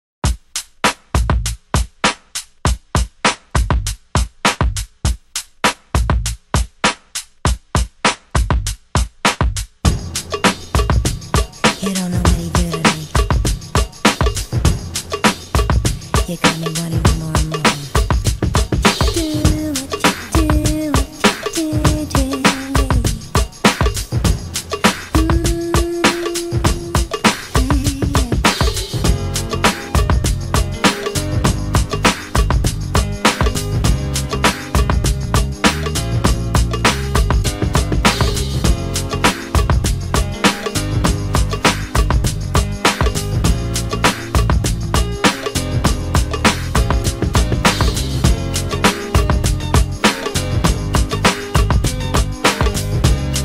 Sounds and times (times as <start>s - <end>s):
Music: 0.2s - 53.4s.